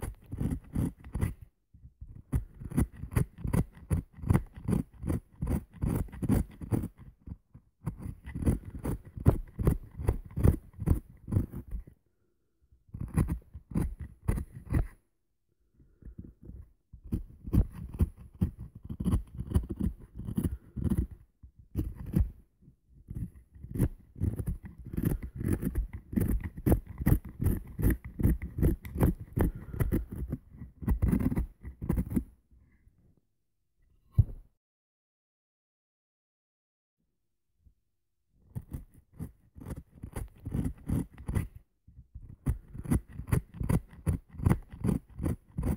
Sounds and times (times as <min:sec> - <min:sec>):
Wood: 0:23.1 - 0:32.3.